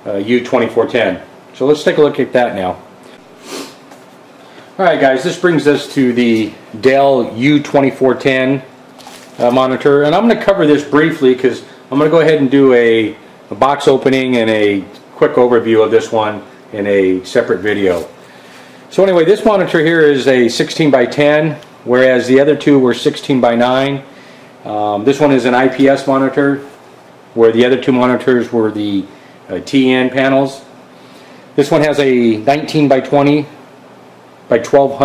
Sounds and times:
Speech: 0.0s - 2.9s, 4.8s - 8.7s, 9.4s - 18.2s, 18.9s - 26.8s, 27.4s - 30.8s, 31.6s - 33.6s, 34.5s - 35.0s.

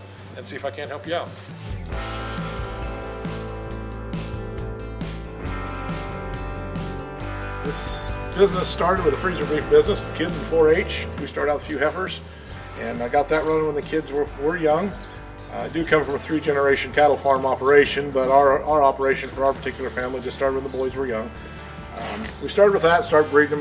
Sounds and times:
Music: 0.0s - 23.6s
Speech: 0.4s - 1.5s, 7.6s - 12.2s, 12.8s - 21.3s, 22.0s - 23.6s.

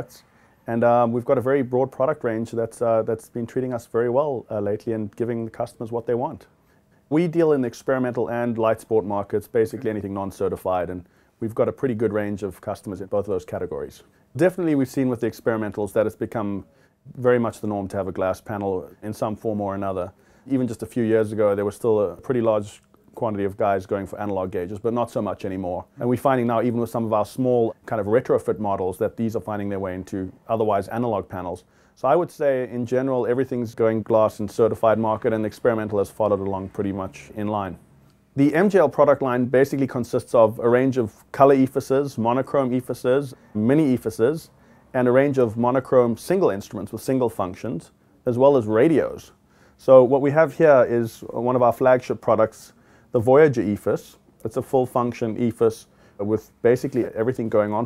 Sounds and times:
Speech: 0.0s - 6.5s, 7.1s - 37.8s, 38.4s - 57.8s.

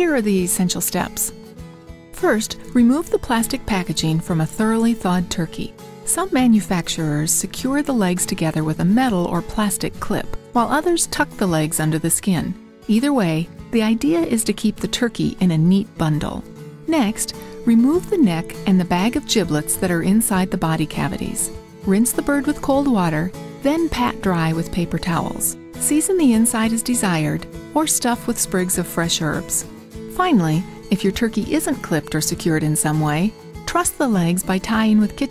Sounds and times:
Speech: 0.0s - 1.3s, 2.2s - 35.3s
Music: 0.0s - 35.3s.

